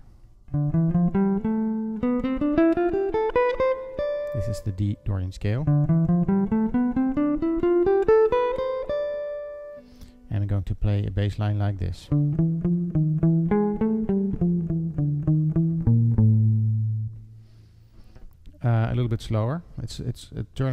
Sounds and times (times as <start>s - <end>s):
Speech: 4.3s - 5.7s, 10.3s - 12.2s, 18.6s - 20.7s.